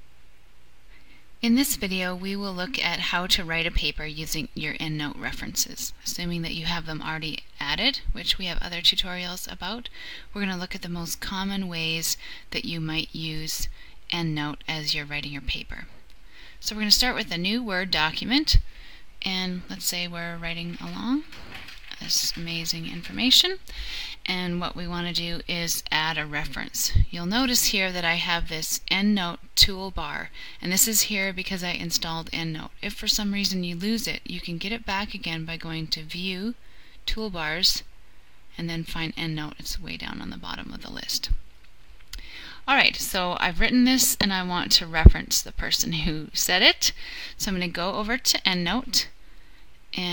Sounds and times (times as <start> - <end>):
Speech: 1.4 - 15.9, 16.6 - 18.6, 19.2 - 23.6, 24.3 - 37.9, 38.6 - 41.4, 42.7 - 49.2.